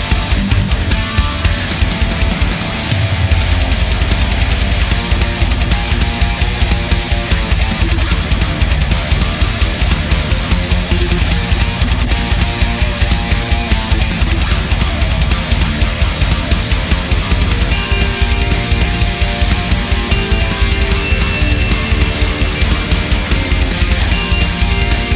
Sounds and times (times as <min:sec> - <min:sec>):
Electric guitar: 0:00.0 - 0:25.1.